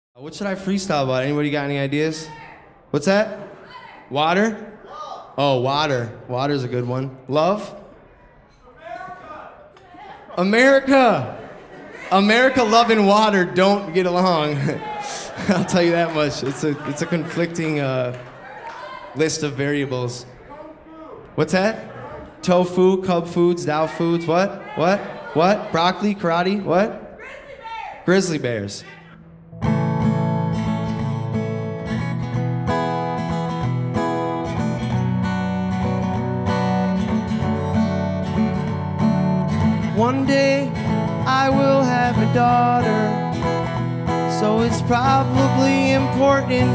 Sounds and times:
Music: 0:29.2 - 0:46.7.

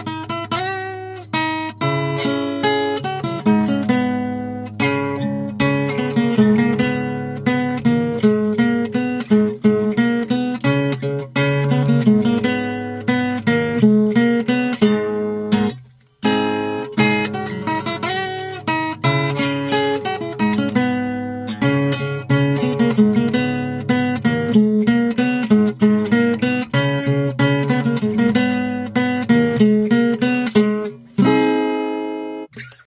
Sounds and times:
Strum: 0:00.0 - 0:32.8.

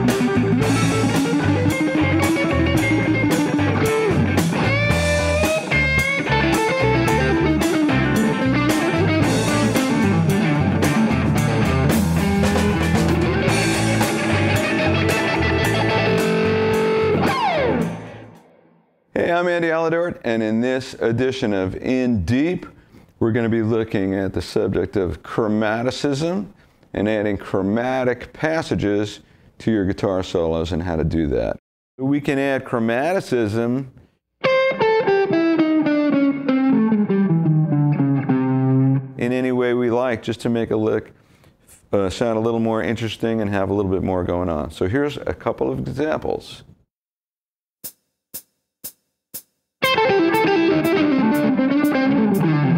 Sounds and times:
Rock music: 0:00.0 - 0:18.6, 0:34.4 - 0:39.2, 0:49.8 - 0:52.7
Electric guitar: 0:00.0 - 0:18.7, 0:34.4 - 0:39.2, 0:49.8 - 0:52.7.

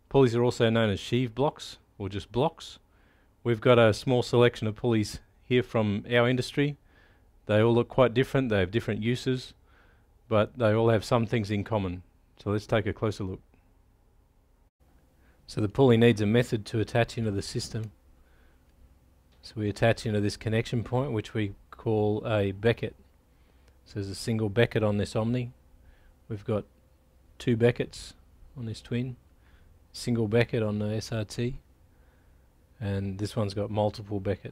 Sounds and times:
Speech: 0:00.1 - 0:02.8, 0:03.4 - 0:06.8, 0:07.4 - 0:09.6, 0:10.3 - 0:13.6, 0:15.5 - 0:18.0, 0:19.4 - 0:23.0, 0:23.9 - 0:25.6, 0:26.3 - 0:26.7, 0:27.4 - 0:29.2, 0:29.9 - 0:31.6, 0:32.8 - 0:34.5.

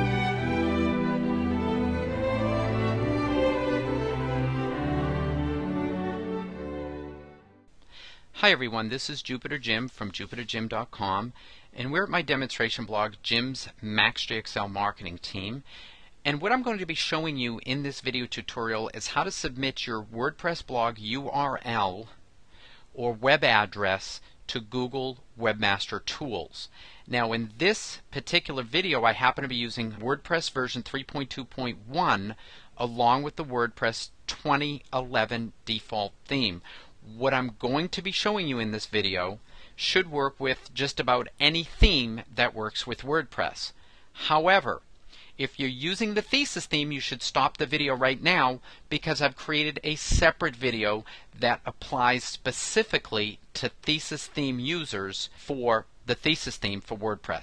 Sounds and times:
Speech: 0:08.4 - 0:22.2, 0:23.0 - 0:44.8, 0:45.4 - 0:57.4.

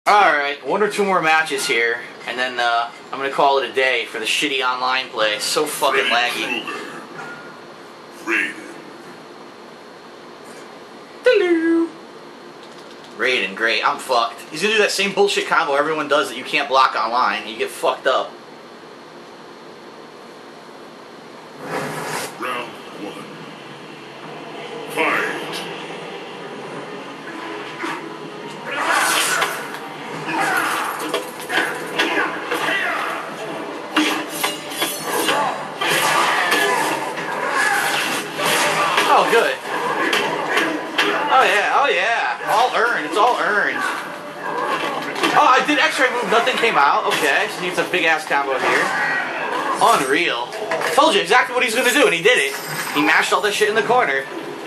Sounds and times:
Speech: 0:00.1 - 0:06.8, 0:13.2 - 0:18.3, 0:39.0 - 0:39.6, 0:41.3 - 0:43.9, 0:45.3 - 0:49.0, 0:49.8 - 0:54.3.

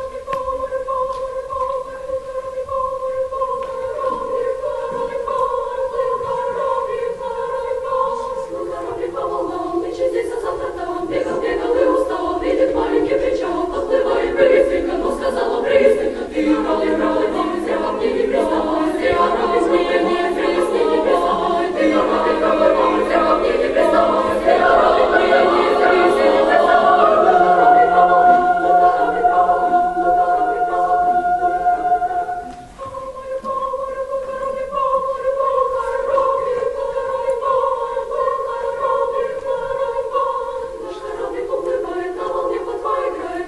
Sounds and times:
Choir: 0:00.0 - 0:43.4.

